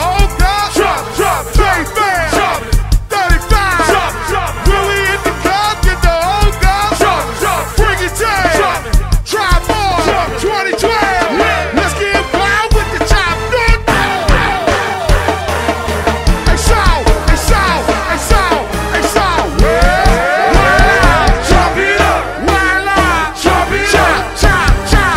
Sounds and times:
Music: 0.0s - 25.1s.

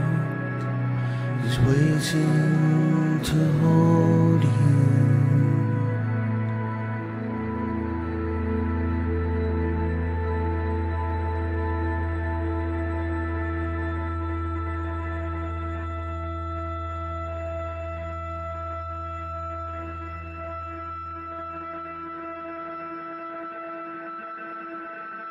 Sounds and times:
New-age music: 0.0s - 25.3s.

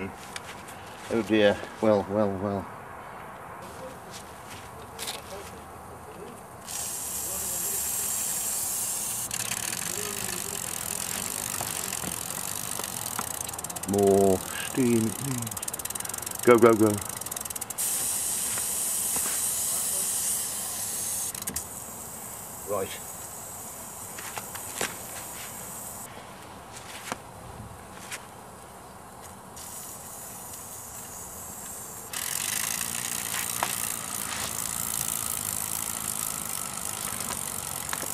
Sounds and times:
Hiss: 6.6s - 12.9s, 13.9s - 26.1s, 29.6s - 38.1s.

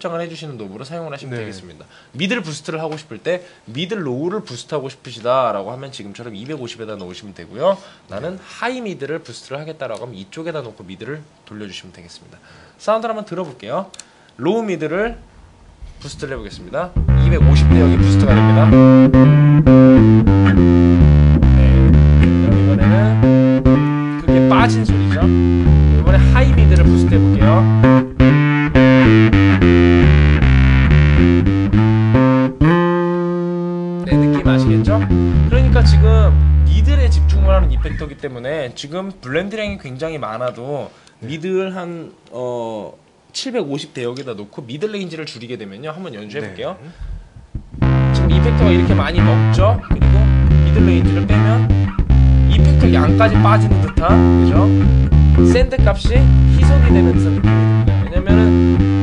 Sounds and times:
Speech: 0.0s - 15.2s, 16.0s - 18.9s, 21.6s - 23.3s, 24.2s - 25.4s, 26.0s - 27.7s, 34.0s - 46.9s, 48.2s - 51.7s, 52.5s - 54.8s, 55.4s - 58.6s
Bass guitar: 15.6s - 38.2s, 47.4s - 59.0s
Effects unit: 16.9s - 38.1s, 47.5s - 59.0s
Tapping (guitar technique): 16.9s - 38.1s, 47.4s - 59.0s.

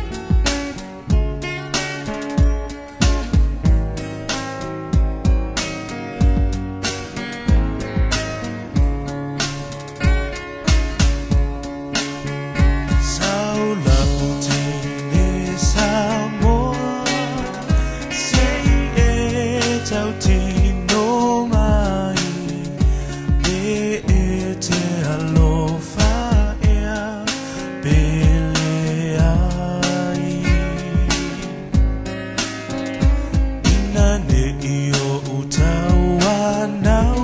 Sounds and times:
Music: 0.0s - 37.2s.

